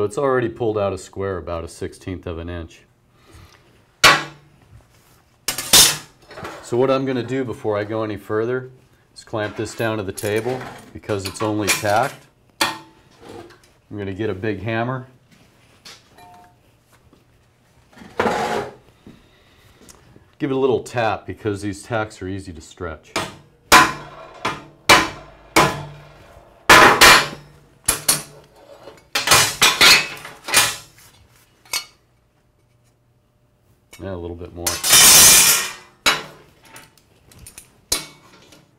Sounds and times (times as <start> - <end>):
Inside, small room: 0.0 - 38.7.